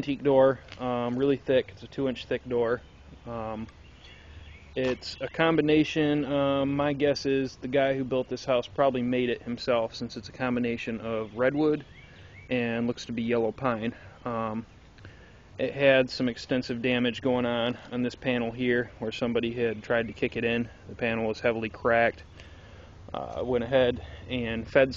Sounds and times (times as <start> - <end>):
Speech: 0.0 - 3.7, 4.8 - 11.8, 12.5 - 14.7, 15.6 - 22.2, 23.1 - 24.9.